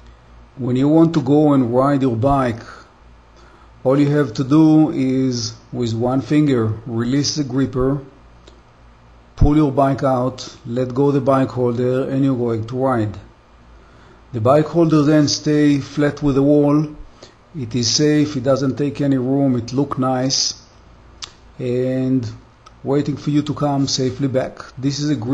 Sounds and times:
Speech: 0.6s - 2.9s, 3.8s - 8.2s, 9.4s - 13.3s, 14.3s - 17.0s, 17.6s - 20.7s, 21.6s - 25.3s.

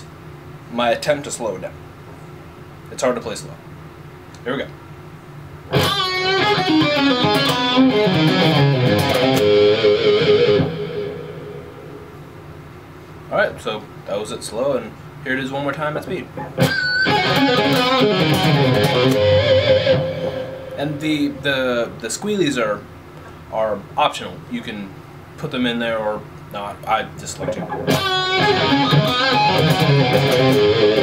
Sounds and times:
Speech: 0.7s - 1.8s, 2.9s - 3.6s, 4.4s - 4.8s, 13.3s - 16.4s, 20.8s - 22.9s, 23.5s - 27.8s
Tapping (guitar technique): 5.7s - 11.2s, 16.4s - 20.9s, 27.4s - 31.0s.

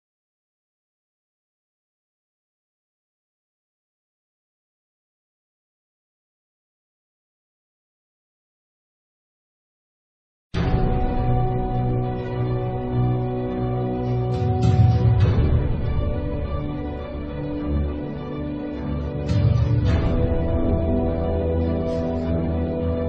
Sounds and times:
Music: 10.6s - 23.0s.

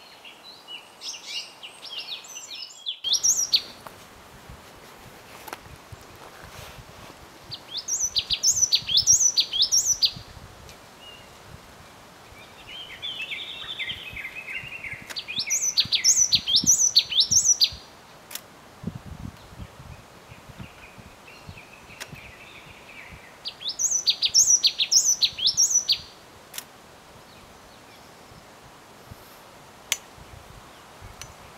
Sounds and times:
Bird: 0.0s - 3.8s, 7.5s - 10.3s, 12.3s - 17.9s, 20.3s - 26.2s.

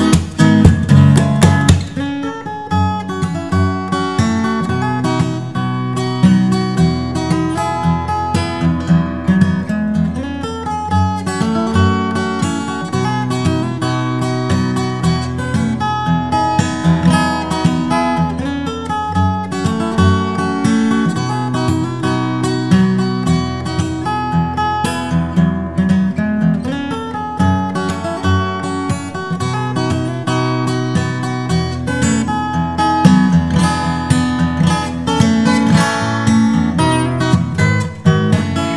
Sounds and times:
Strum: 0.0s - 38.7s.

